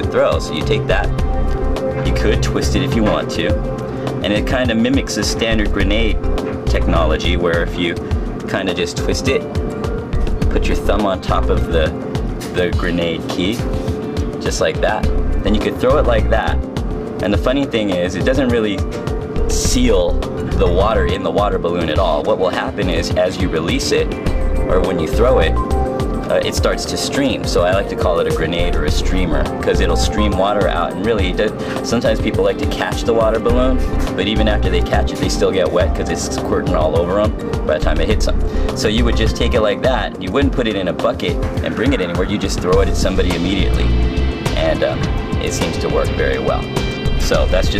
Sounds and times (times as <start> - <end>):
Speech: 0.0 - 1.1, 2.0 - 3.6, 4.2 - 9.5, 10.5 - 13.7, 14.4 - 16.6, 17.2 - 18.9, 19.5 - 25.6, 26.3 - 47.7
Music: 0.0 - 47.7.